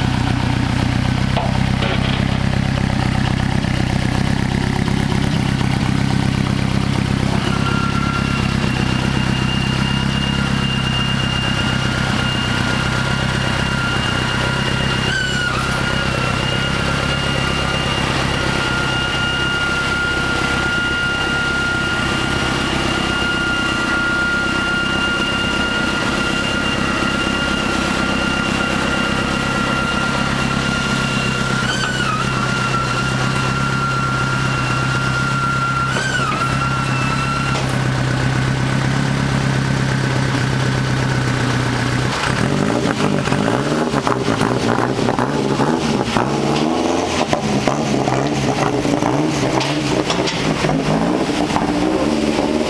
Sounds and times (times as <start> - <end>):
Truck: 0.0 - 52.6.